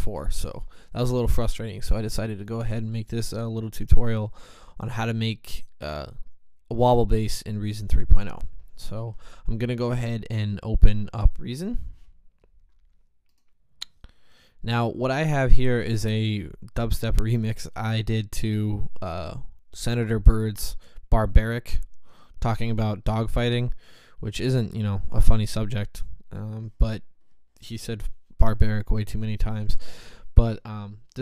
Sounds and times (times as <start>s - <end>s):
Speech: 0.0s - 11.9s, 14.6s - 31.2s.